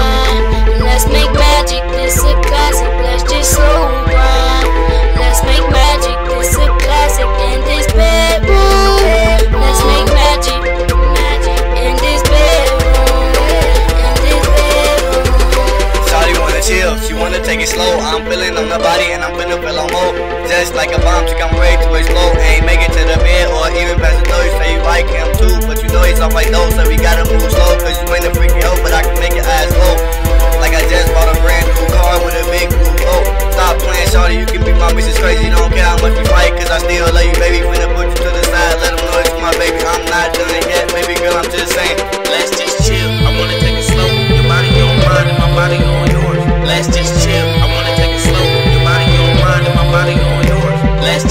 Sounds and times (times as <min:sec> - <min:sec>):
Funk: 0:00.0 - 0:18.0, 0:20.9 - 0:51.3.